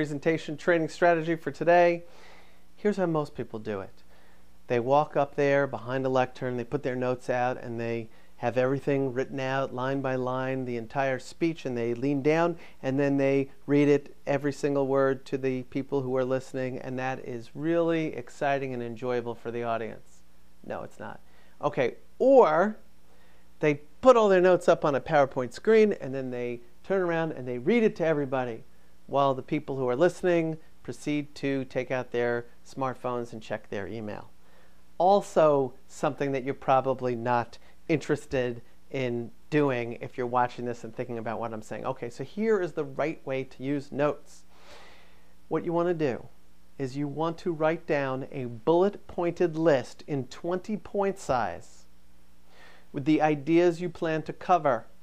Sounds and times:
Male speech, man speaking: 0.0 - 2.0, 2.8 - 4.0, 4.7 - 22.8, 23.6 - 34.3, 35.0 - 44.4, 45.5 - 51.9, 53.0 - 54.9.

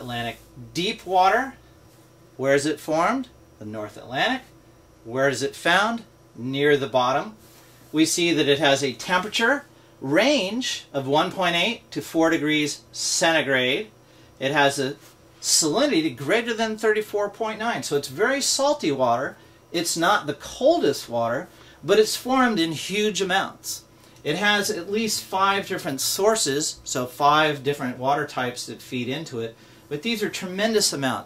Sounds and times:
Speech: 0.0 - 1.6, 2.4 - 31.2.

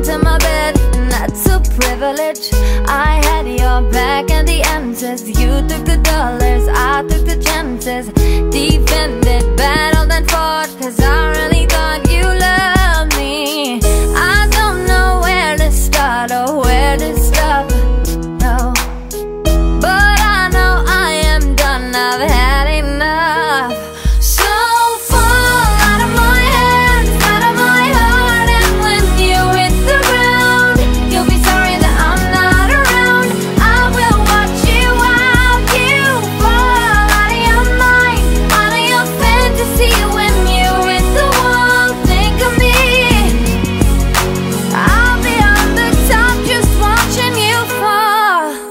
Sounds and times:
Blues: 2.8 - 48.0.

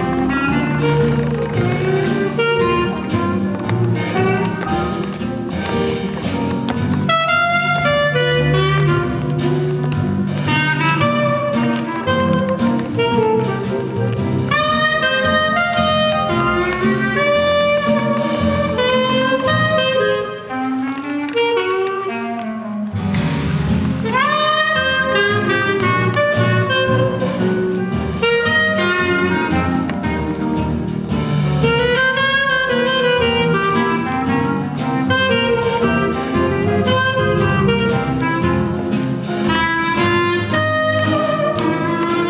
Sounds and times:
Blues: 0.0 - 42.3.

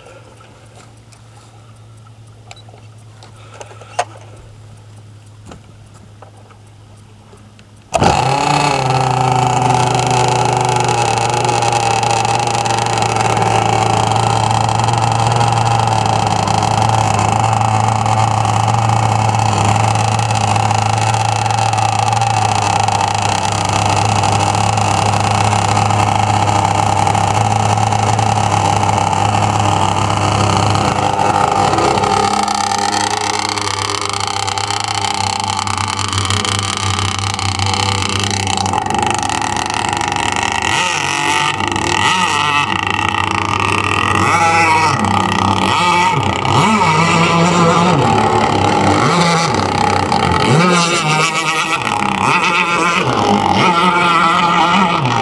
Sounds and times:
Motorboat, speedboat: 0.0 - 55.2.

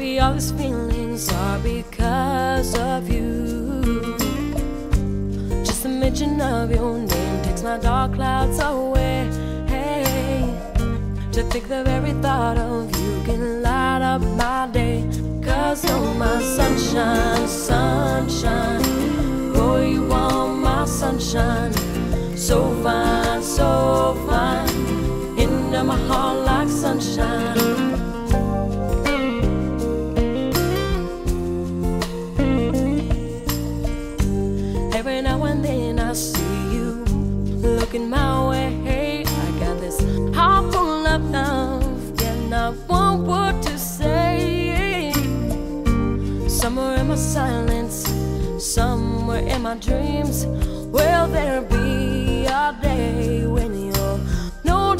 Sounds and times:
Tender music: 0.0 - 54.9.

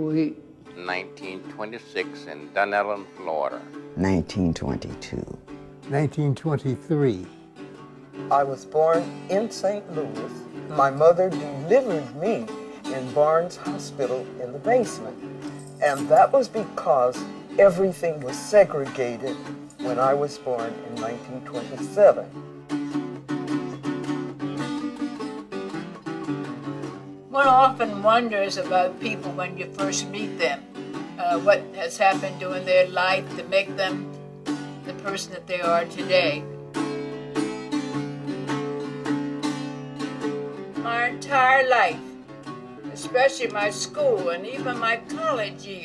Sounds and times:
Music: 0.0 - 45.8
Speech: 0.9 - 7.3.

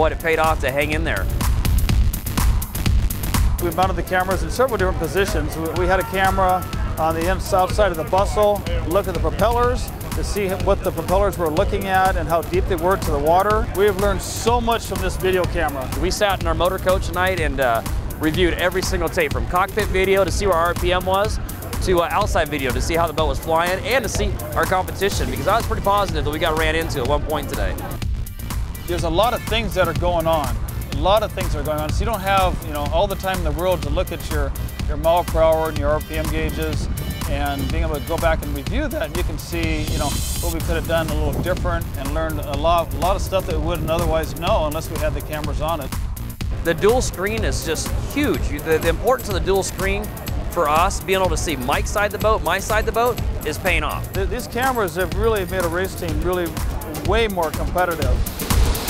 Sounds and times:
Speech: 0.0 - 1.3, 3.6 - 28.0, 28.9 - 45.9, 46.6 - 58.2
Music: 0.0 - 58.8.

